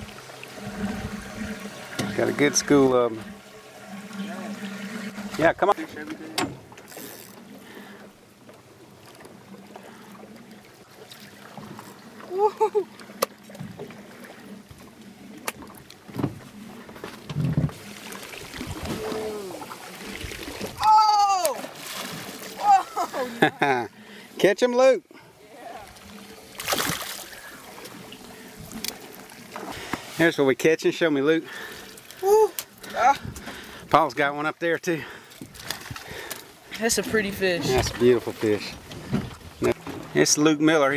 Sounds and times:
Boat, Water vehicle: 0.0 - 40.9
Ocean: 0.0 - 40.9.

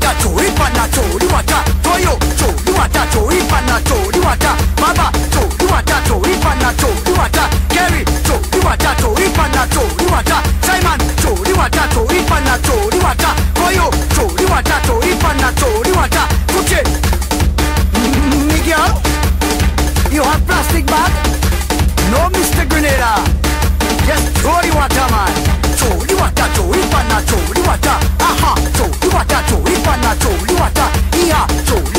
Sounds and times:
Music: 0.0 - 31.9.

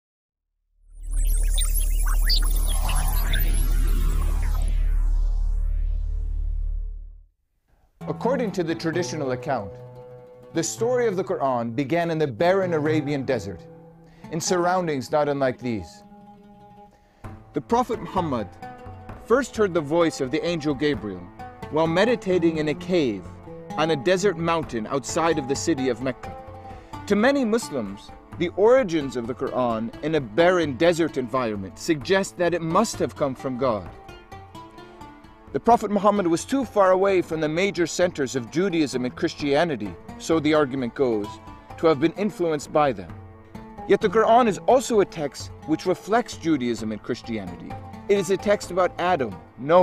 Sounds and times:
Music: 0.8 - 7.3, 7.9 - 49.8
Speech: 8.1 - 9.8, 10.6 - 13.6, 14.3 - 16.0, 17.6 - 18.5, 19.3 - 23.2, 23.8 - 26.4, 27.1 - 33.9, 35.6 - 43.1, 43.9 - 49.8.

